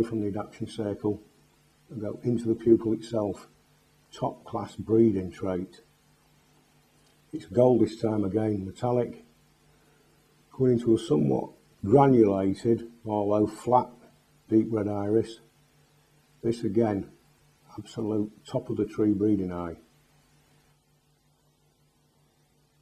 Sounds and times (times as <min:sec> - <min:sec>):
Speech: 0:00.0 - 0:01.3, 0:01.9 - 0:05.9, 0:07.3 - 0:09.3, 0:10.5 - 0:15.5, 0:16.4 - 0:19.9.